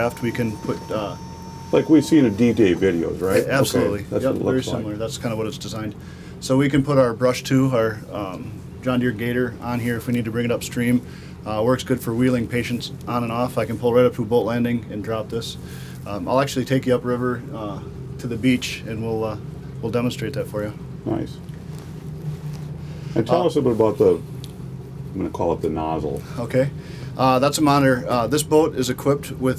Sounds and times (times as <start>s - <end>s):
Speech: 0.0s - 1.2s, 1.8s - 21.4s, 23.2s - 24.2s, 25.2s - 29.5s.